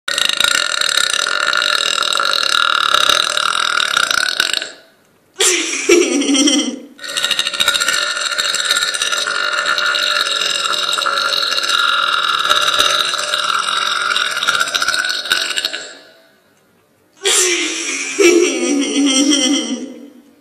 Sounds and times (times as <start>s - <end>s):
Burping, eructation: 0.1s - 5.0s, 7.0s - 16.4s.